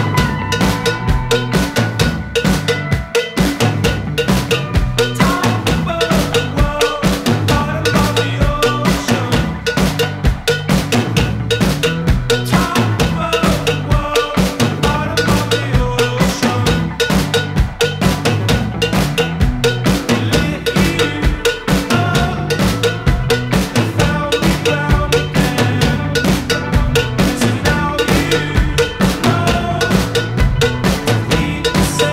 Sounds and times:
Bass drum: 0.0 - 32.1
Drum kit: 0.0 - 32.1.

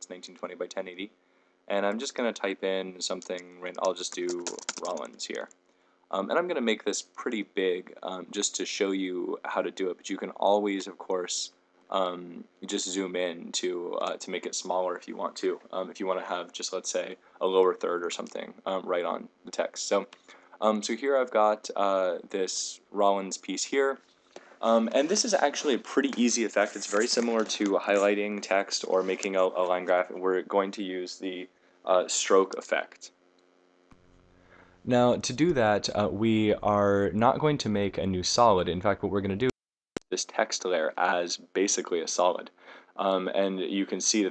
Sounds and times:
Speech: 0.0 - 1.1, 1.7 - 5.5, 6.1 - 24.0, 24.6 - 33.2, 34.9 - 44.3.

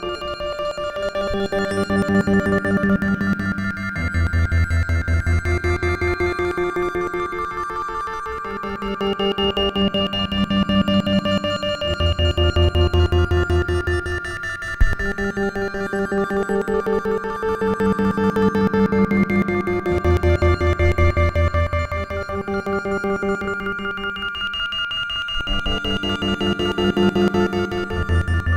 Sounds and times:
Percussion: 0.0 - 28.5.

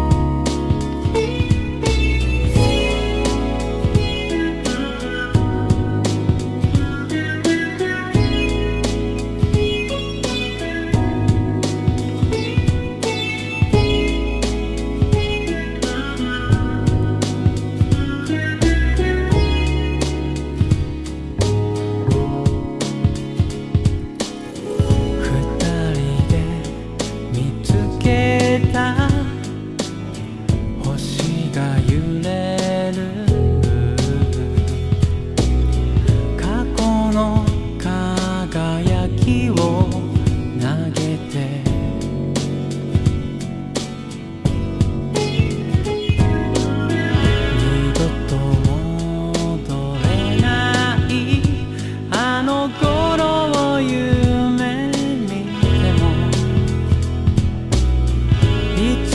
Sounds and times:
Music: 0.0 - 59.1.

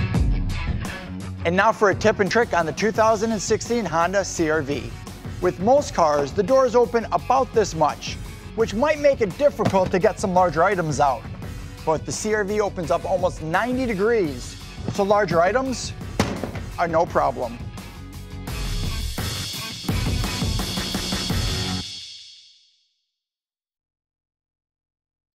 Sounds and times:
Music: 0.0 - 23.2
Speech: 1.4 - 11.2, 11.9 - 15.9, 16.8 - 17.6.

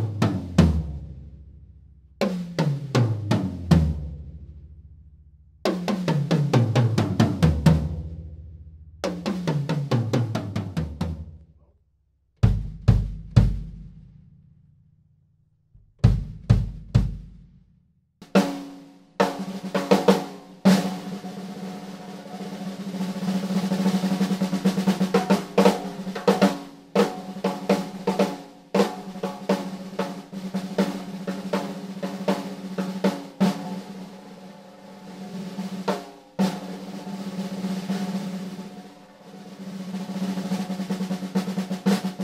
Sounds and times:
Drum roll: 0.0 - 1.2, 2.2 - 4.6, 5.7 - 11.4, 12.4 - 14.0, 16.0 - 17.5, 18.2 - 42.2
Bass drum: 12.4 - 14.3, 15.8 - 17.7.

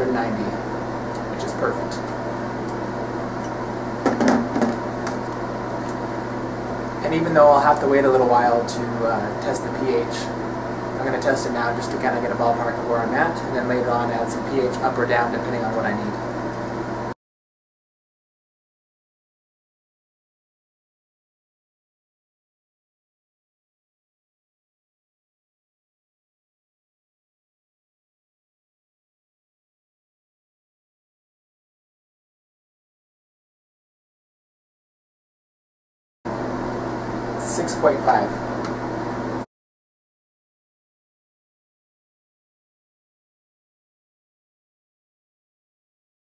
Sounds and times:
Speech: 0.0 - 0.6, 1.3 - 2.2, 7.0 - 10.4, 11.0 - 16.2, 37.4 - 38.4.

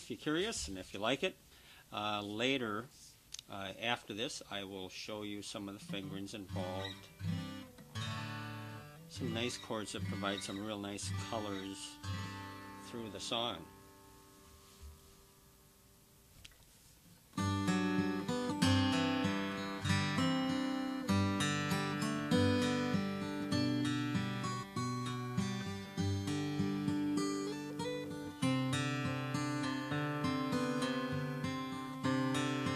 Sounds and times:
Acoustic guitar: 5.4 - 32.7.

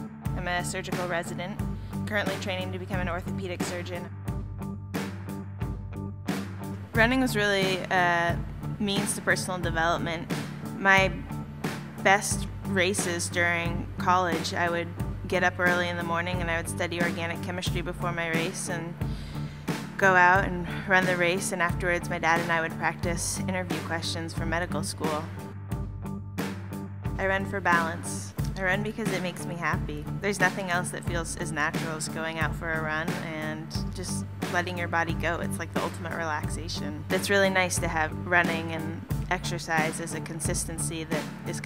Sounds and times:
Music: 0.0 - 41.6
Speech: 0.4 - 4.1, 7.0 - 11.2, 12.1 - 19.0, 20.0 - 25.4, 27.2 - 41.6.

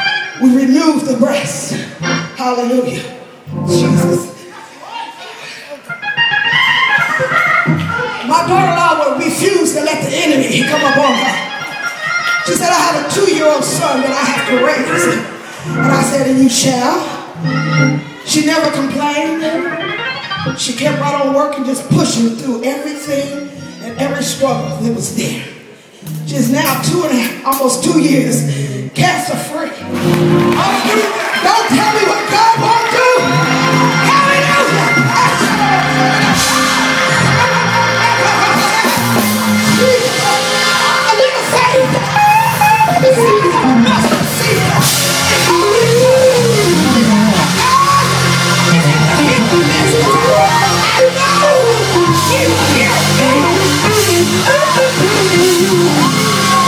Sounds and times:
Music: 0.0 - 4.5, 5.8 - 25.4, 26.0 - 56.6
Speech: 8.2 - 11.5, 20.5 - 25.6, 26.3 - 29.8.

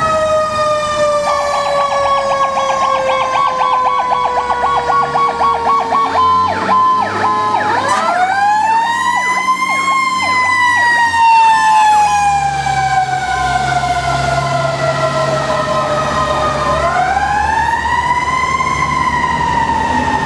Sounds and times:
Fire engine, fire truck (siren): 0.0 - 20.2
Truck: 0.0 - 20.2.

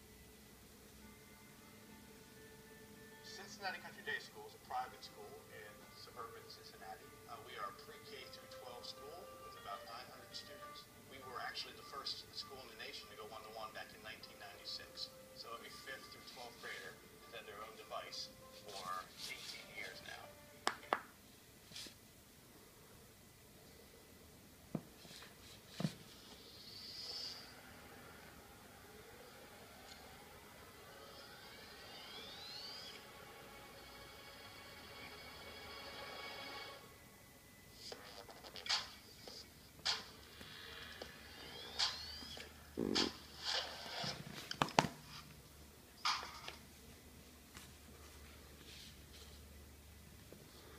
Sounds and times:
Inside, small room: 0.0 - 50.7.

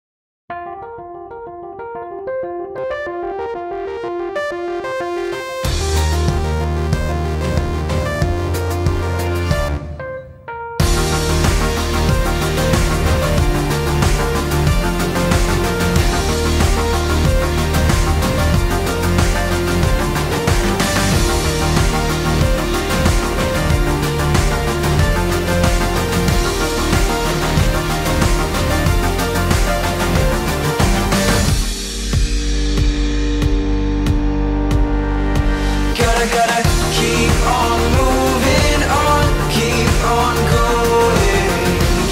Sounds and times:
Music: 0.5 - 42.1.

